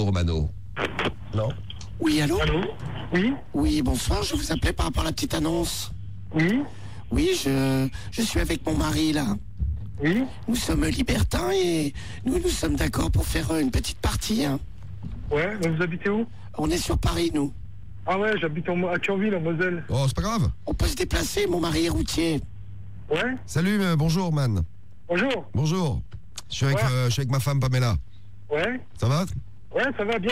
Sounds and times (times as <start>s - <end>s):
Speech: 1.3s - 9.4s, 23.1s - 30.3s.